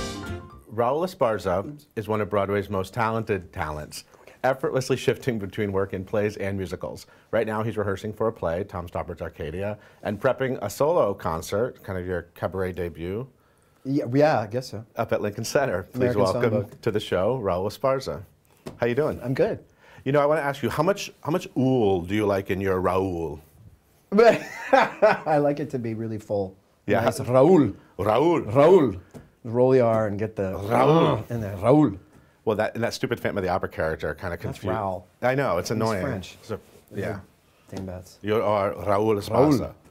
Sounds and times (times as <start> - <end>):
Speech: 0.7 - 13.3, 13.9 - 23.4, 25.3 - 39.9.